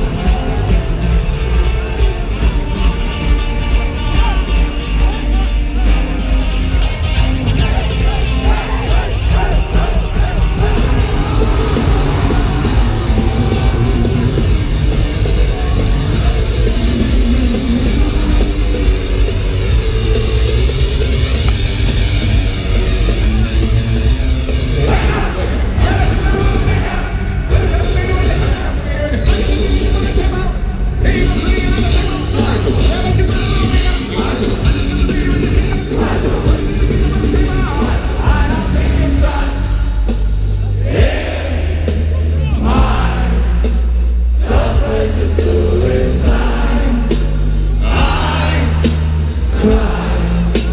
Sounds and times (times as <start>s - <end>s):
Music: 0.0s - 50.7s.